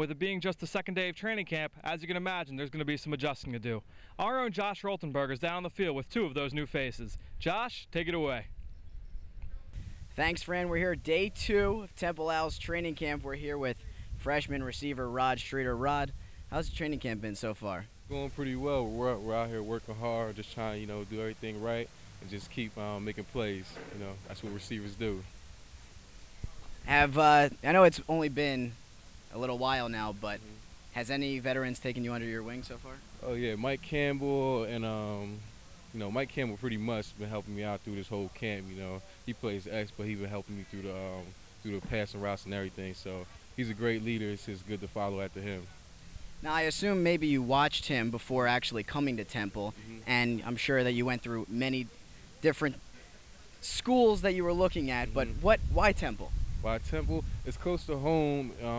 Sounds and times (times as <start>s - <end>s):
Speech: 0.0s - 8.5s, 10.2s - 25.3s, 26.8s - 28.8s, 29.4s - 45.8s, 46.4s - 58.7s.